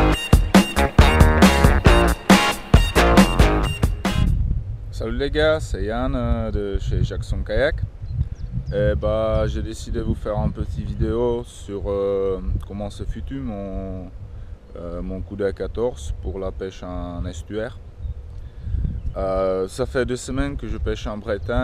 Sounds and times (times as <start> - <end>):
Speech: 4.9 - 7.8, 8.7 - 14.1, 14.8 - 17.8, 19.2 - 21.6.